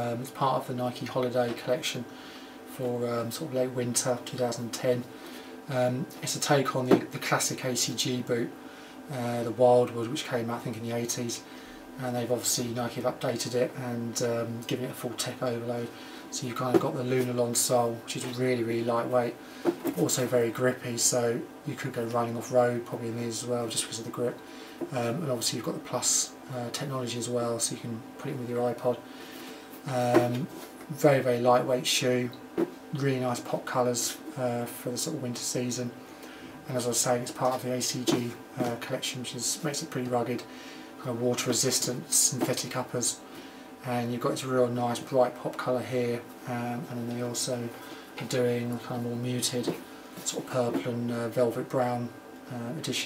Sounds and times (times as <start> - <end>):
Speech: 0.0 - 29.1, 29.8 - 36.0, 36.6 - 43.2, 43.8 - 53.0.